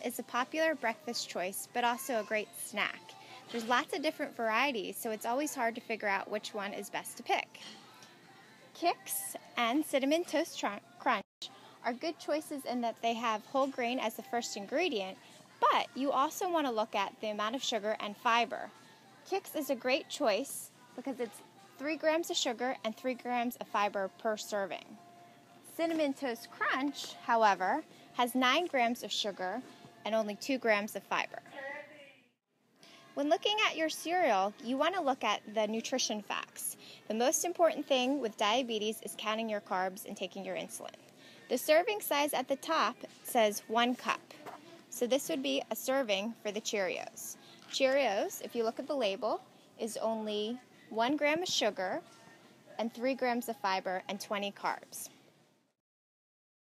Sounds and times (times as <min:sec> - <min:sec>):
Speech: 0:00.0 - 0:07.8, 0:08.8 - 0:18.7, 0:19.3 - 0:25.0, 0:25.7 - 0:32.3, 0:33.2 - 0:52.2, 0:52.8 - 0:55.1.